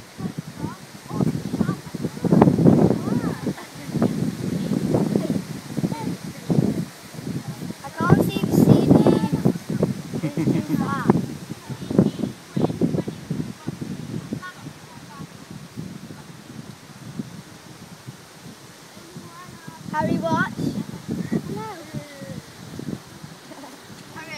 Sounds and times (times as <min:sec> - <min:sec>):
Wind noise (microphone): 0:00.0 - 0:24.3.